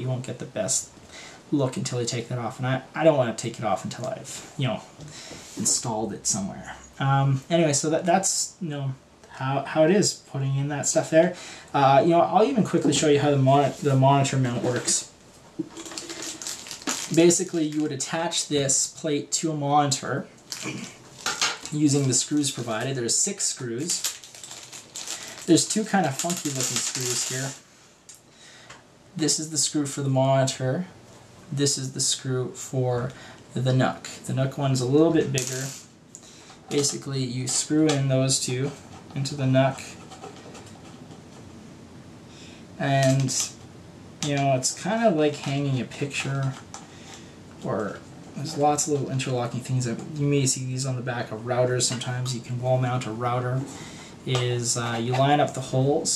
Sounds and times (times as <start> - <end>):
Speech: 0.0 - 0.9, 1.5 - 4.9, 5.6 - 15.1, 17.0 - 20.9, 21.7 - 24.1, 25.4 - 27.6, 29.2 - 35.8, 36.7 - 40.0, 42.8 - 43.6, 44.2 - 46.7, 47.6 - 56.1
Inside, small room: 0.0 - 56.1.